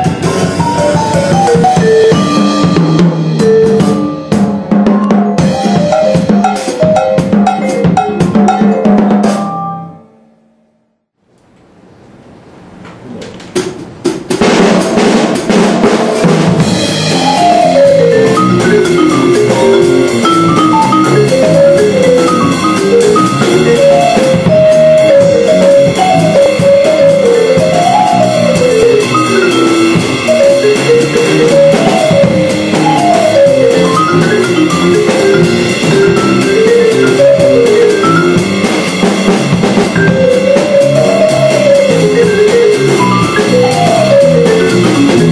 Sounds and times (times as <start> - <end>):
Vibraphone: 0.5 - 10.8, 17.0 - 38.7, 39.9 - 45.3.